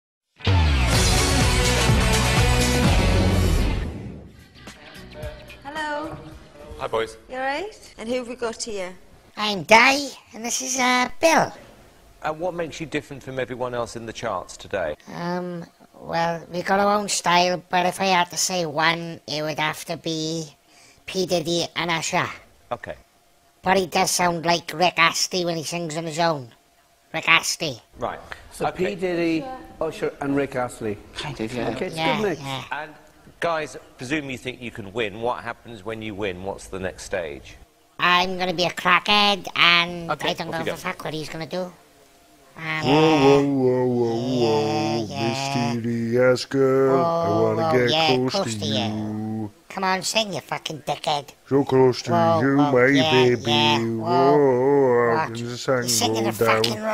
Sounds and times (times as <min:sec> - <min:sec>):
Music: 0:00.4 - 0:06.8.